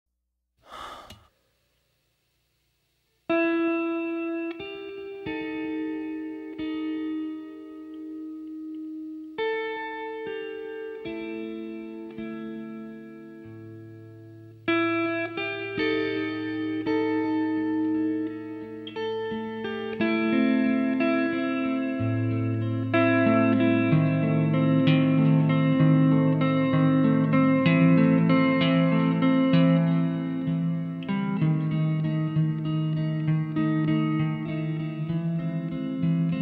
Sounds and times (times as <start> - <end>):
Guitar: 3.1 - 36.4.